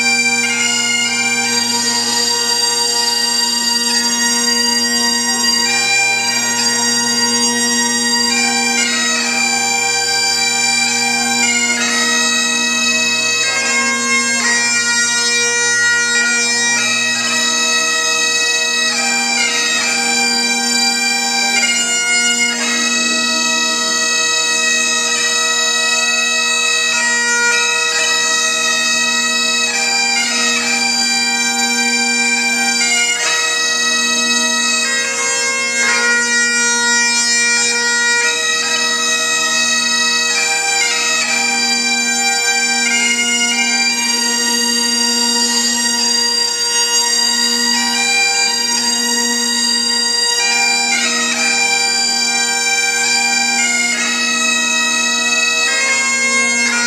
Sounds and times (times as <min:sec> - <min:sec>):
Bagpipes: 0:00.0 - 0:56.8
Wind instrument, woodwind instrument: 0:00.0 - 0:56.8.